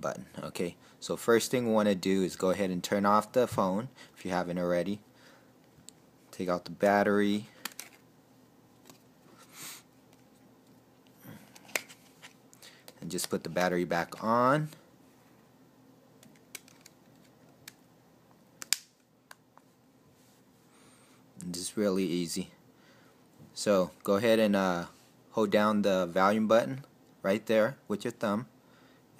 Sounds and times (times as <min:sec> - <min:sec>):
Speech: 0:00.0 - 0:05.0, 0:06.3 - 0:07.5, 0:13.0 - 0:14.8, 0:21.4 - 0:22.6, 0:23.6 - 0:28.5
Inside, small room: 0:00.0 - 0:29.1.